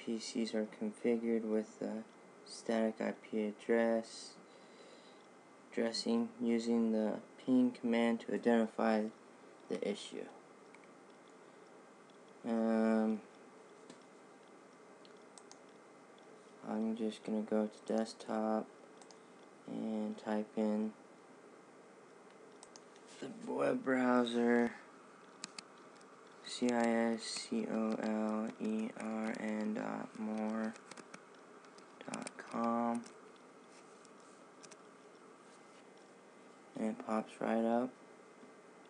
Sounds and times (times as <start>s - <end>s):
Speech: 0.0s - 4.4s, 5.8s - 10.4s, 12.4s - 13.3s, 16.6s - 18.7s, 19.7s - 21.0s, 23.2s - 24.9s, 26.4s - 30.8s, 32.0s - 33.1s, 36.8s - 38.0s.